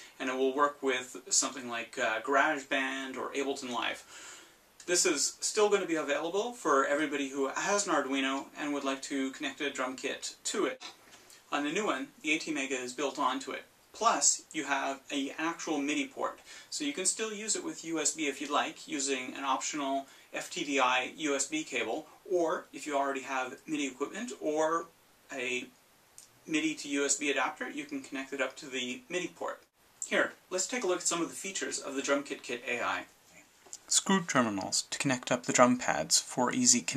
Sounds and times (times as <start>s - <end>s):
Speech: 0.0s - 4.1s, 4.8s - 25.8s, 26.4s - 33.1s, 33.8s - 36.9s.